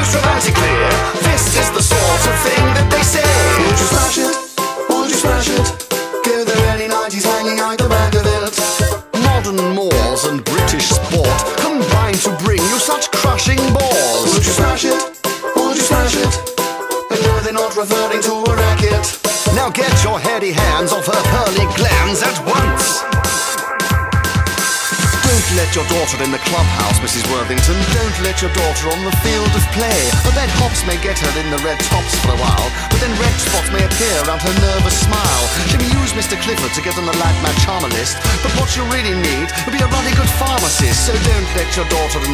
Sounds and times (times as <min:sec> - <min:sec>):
Music: 0:00.0 - 0:42.3.